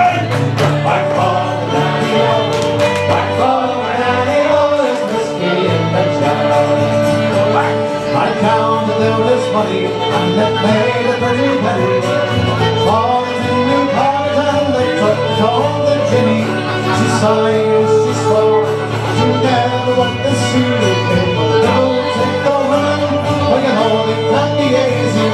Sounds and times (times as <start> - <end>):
Music: 0.0 - 25.3.